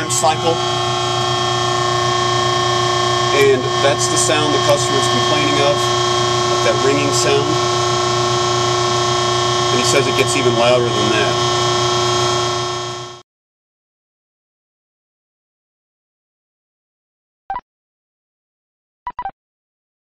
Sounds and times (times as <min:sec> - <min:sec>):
Speech: 0:00.0 - 0:00.6, 0:03.3 - 0:05.9, 0:06.5 - 0:07.7, 0:09.7 - 0:11.4.